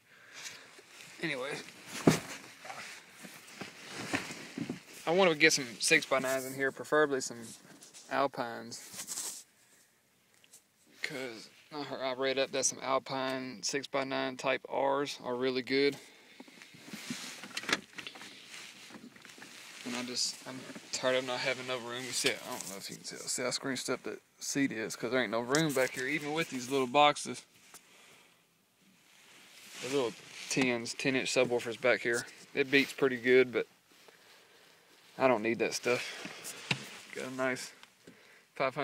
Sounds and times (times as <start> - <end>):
Speech: 1.2 - 1.7, 5.0 - 9.0, 11.0 - 16.1, 19.8 - 27.5, 29.8 - 33.7, 35.2 - 36.2, 37.1 - 37.8, 38.6 - 38.8.